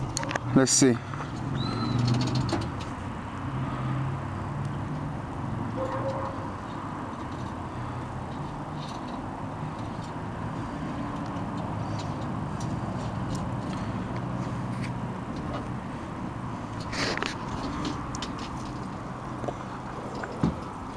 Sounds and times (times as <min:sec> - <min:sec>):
Truck: 0:00.0 - 0:20.9.